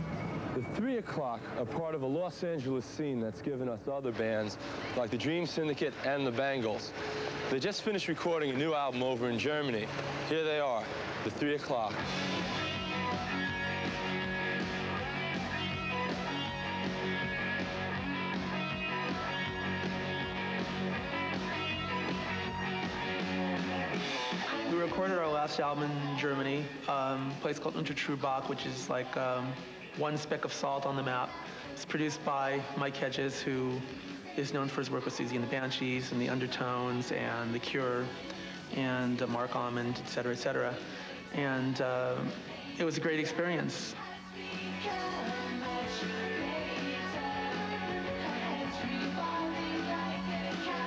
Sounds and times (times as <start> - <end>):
Speech: 0.6 - 6.9, 7.5 - 12.0, 24.7 - 38.1, 38.7 - 44.0
Music: 2.2 - 50.8.